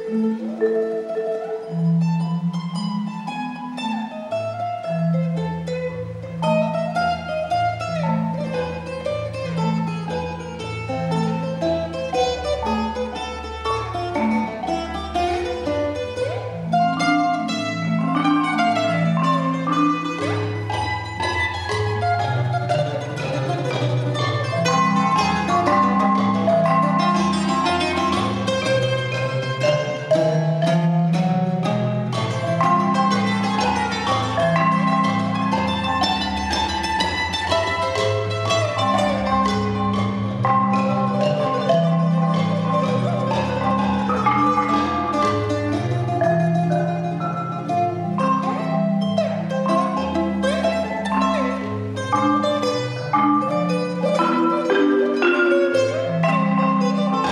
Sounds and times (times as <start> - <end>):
Marimba, xylophone: 0.0 - 57.3
Glockenspiel: 6.5 - 57.3.